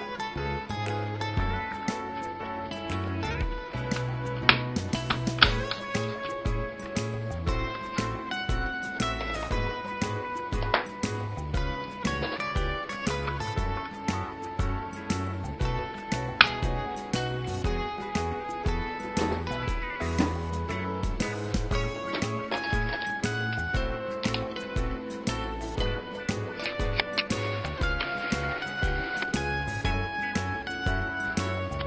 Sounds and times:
Inside, small room: 0.0s - 31.8s
Music: 0.0s - 31.8s.

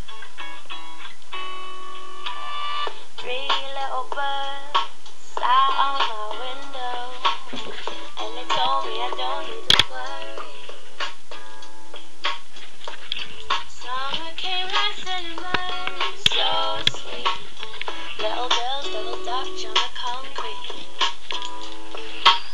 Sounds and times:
Inside, small room: 0.0s - 22.5s
Music: 0.0s - 22.5s.

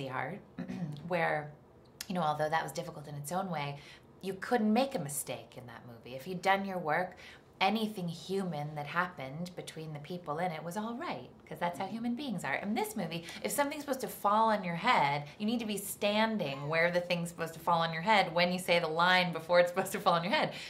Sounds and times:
Speech: 0.0s - 0.4s, 1.0s - 20.6s
Inside, small room: 0.0s - 20.6s.

